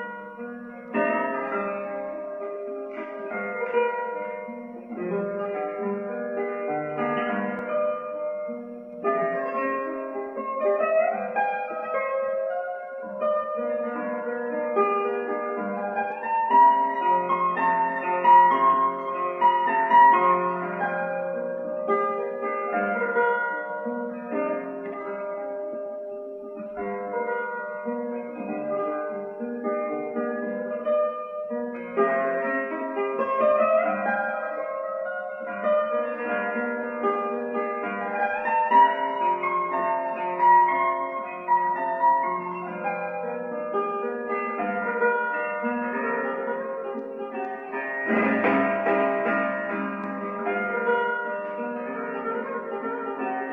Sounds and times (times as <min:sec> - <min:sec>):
Guitar: 0:00.0 - 0:53.5.